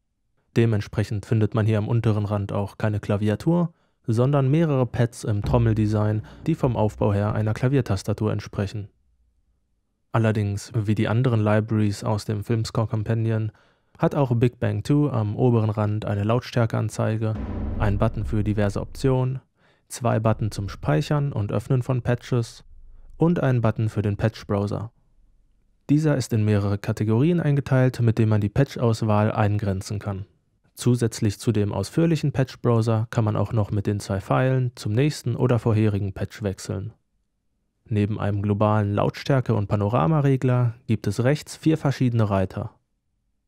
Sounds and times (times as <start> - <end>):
Speech: 0.5 - 8.9, 10.2 - 22.6, 23.2 - 24.9, 25.9 - 37.0, 37.9 - 42.8.